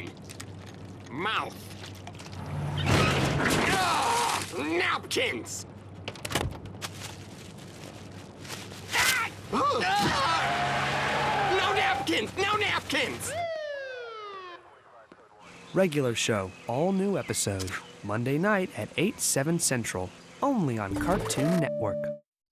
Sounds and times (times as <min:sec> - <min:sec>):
Outside, rural or natural: 0:00.0 - 0:21.9
Speech: 0:14.8 - 0:22.2
Music: 0:20.9 - 0:22.2.